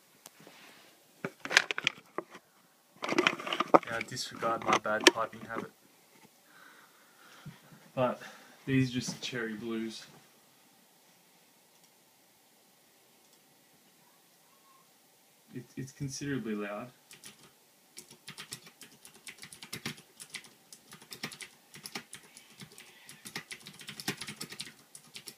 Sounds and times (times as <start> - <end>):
Inside, small room: 0.0 - 25.3
Speech: 3.9 - 5.8, 8.0 - 10.2, 15.5 - 17.0.